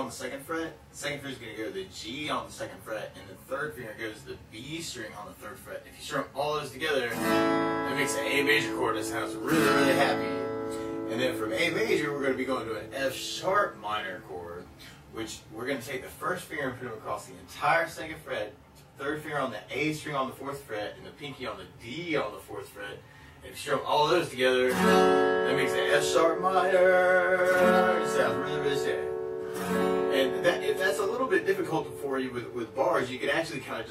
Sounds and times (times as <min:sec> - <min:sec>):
Speech: 0:00.0 - 0:07.2, 0:07.9 - 0:10.4, 0:11.1 - 0:24.8, 0:25.4 - 0:29.1, 0:30.1 - 0:33.9
Music: 0:07.2 - 0:14.2, 0:24.7 - 0:33.4.